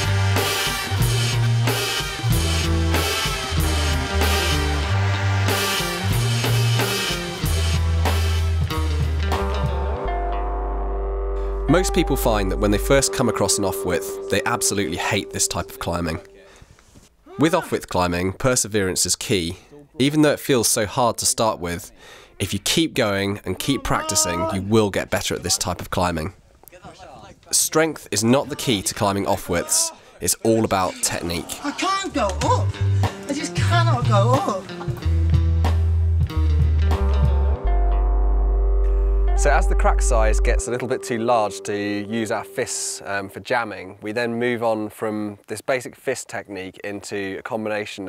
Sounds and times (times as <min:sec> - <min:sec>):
Speech: 0:11.7 - 0:16.5, 0:17.3 - 0:32.7, 0:33.3 - 0:34.6, 0:39.4 - 0:48.0.